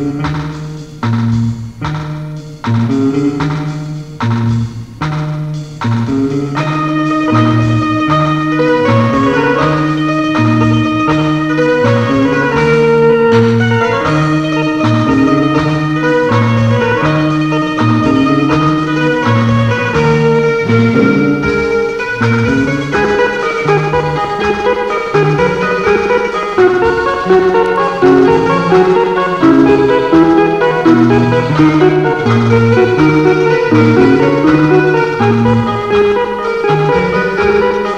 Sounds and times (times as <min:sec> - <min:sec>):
Music: 0:00.0 - 0:37.9.